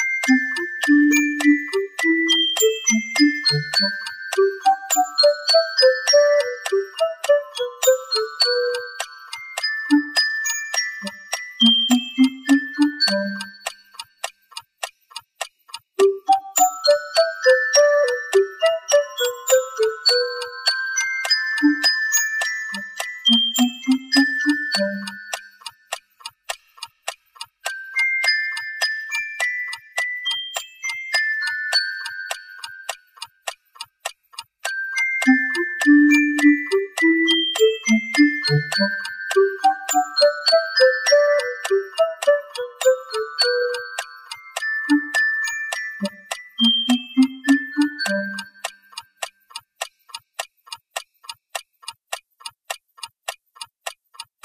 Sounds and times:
Music: 0:00.0 - 0:14.1, 0:16.0 - 0:25.6, 0:27.6 - 0:33.0, 0:34.6 - 0:48.8
Tick-tock: 0:00.0 - 0:54.4.

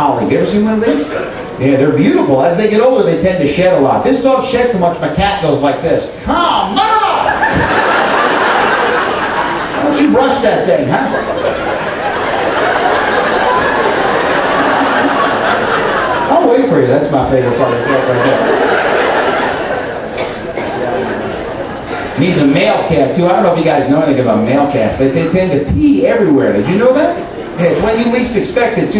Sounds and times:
Speech: 0:00.0 - 0:07.3, 0:09.8 - 0:11.3, 0:16.3 - 0:18.5, 0:22.2 - 0:28.9.

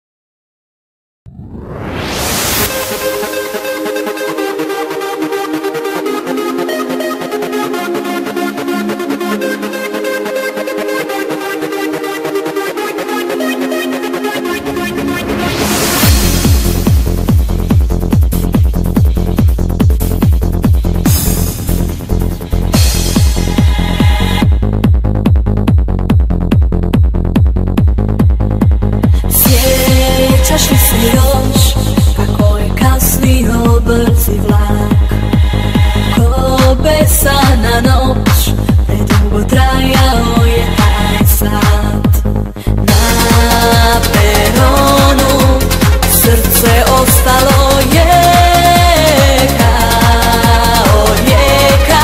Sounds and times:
Pop music: 0:02.0 - 0:24.9, 0:28.1 - 0:52.0.

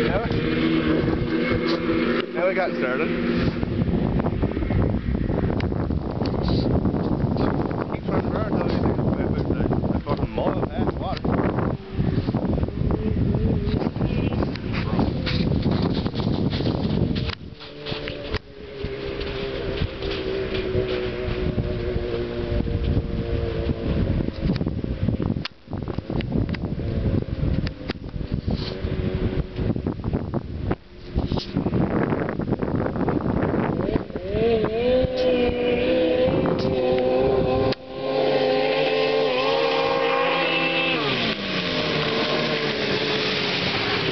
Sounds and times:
Speech: 0:07.9 - 0:11.3.

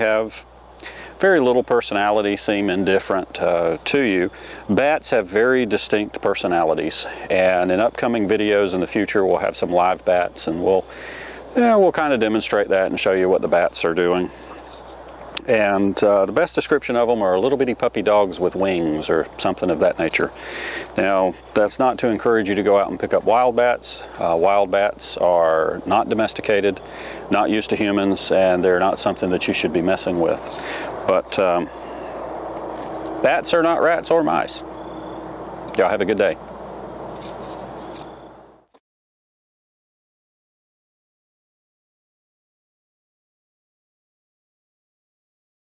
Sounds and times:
Speech: 0:00.0 - 0:00.5, 0:01.2 - 0:10.9, 0:11.6 - 0:14.4, 0:15.4 - 0:31.7, 0:33.2 - 0:34.6, 0:35.7 - 0:36.4
Outside, rural or natural: 0:00.0 - 0:38.8.

